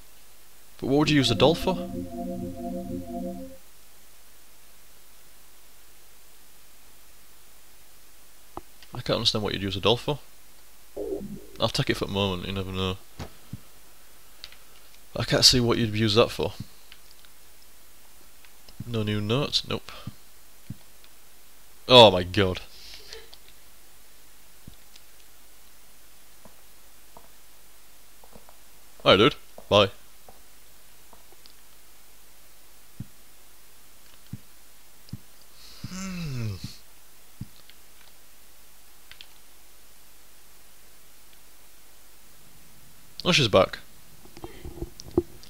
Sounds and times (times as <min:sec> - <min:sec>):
Speech: 0:00.8 - 0:01.8, 0:09.0 - 0:10.2, 0:11.6 - 0:13.0, 0:15.2 - 0:16.6, 0:18.8 - 0:20.1, 0:21.9 - 0:22.7, 0:29.0 - 0:30.0, 0:43.2 - 0:43.9.